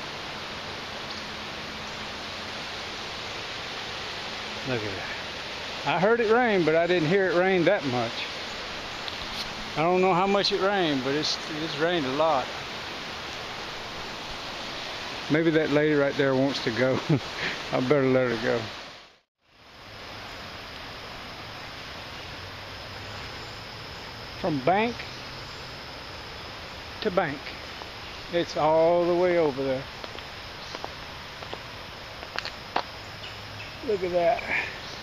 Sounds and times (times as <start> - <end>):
Outside, rural or natural: 0.0 - 35.0
Speech: 4.6 - 5.2, 5.8 - 8.3, 9.8 - 12.5, 15.3 - 17.1, 17.7 - 18.7, 24.4 - 25.0, 27.0 - 27.5, 28.3 - 29.9, 33.8 - 34.8.